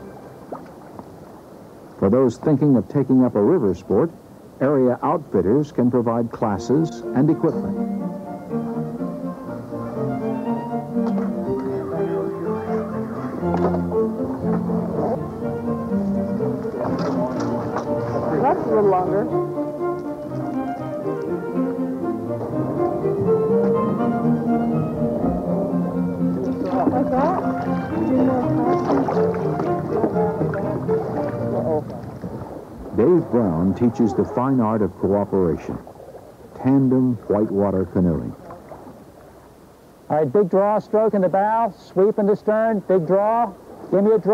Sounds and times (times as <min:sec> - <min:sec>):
Rowboat, canoe, kayak: 0:00.0 - 0:44.3.